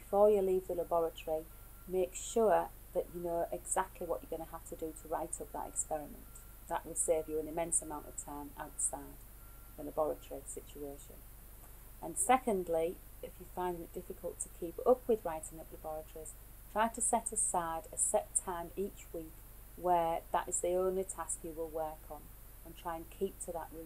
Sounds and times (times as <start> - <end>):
Speech: 0.0 - 9.2, 9.8 - 11.2, 12.0 - 23.8.